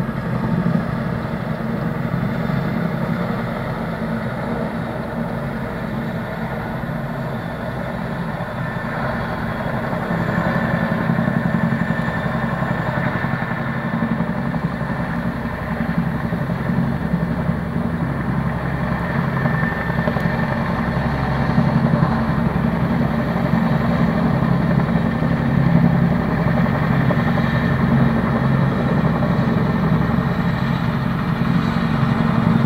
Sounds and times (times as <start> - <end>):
Helicopter: 0.0 - 32.6.